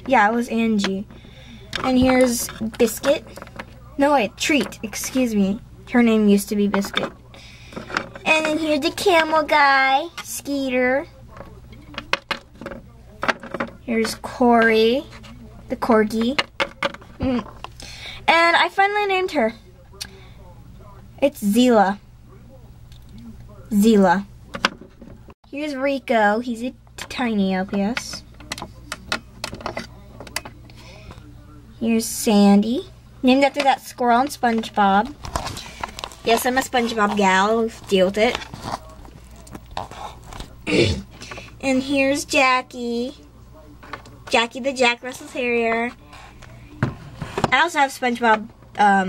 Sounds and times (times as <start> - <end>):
Speech: 0.0 - 16.4, 18.2 - 24.3, 25.5 - 49.0
Inside, small room: 0.0 - 49.0.